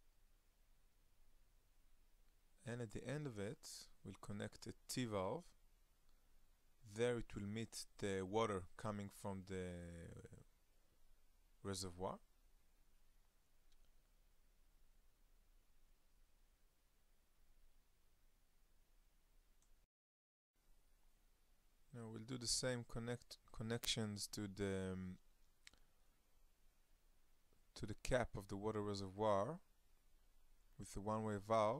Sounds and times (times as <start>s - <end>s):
Speech: 2.6s - 5.6s, 6.8s - 10.5s, 11.6s - 12.3s, 21.9s - 25.2s, 27.8s - 29.7s, 30.8s - 31.8s.